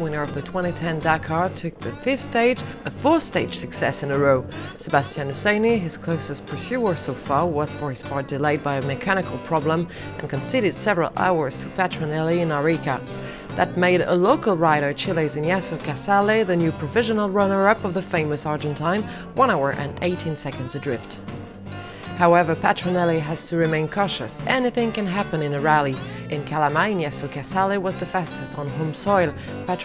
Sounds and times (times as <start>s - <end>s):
Speech: 0.0s - 21.2s, 22.2s - 29.8s
Music: 0.0s - 29.8s.